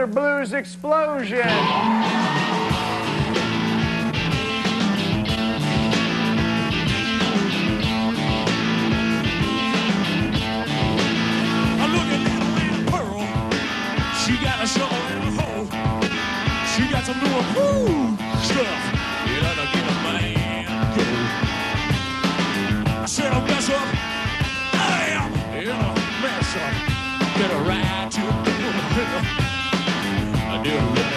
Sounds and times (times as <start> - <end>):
Blues: 0.0 - 31.1.